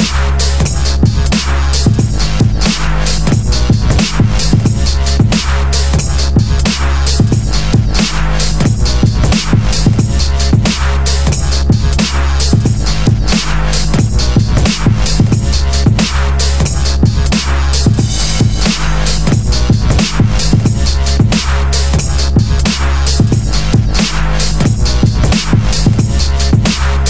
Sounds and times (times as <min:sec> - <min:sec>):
Dubstep: 0:00.0 - 0:27.1.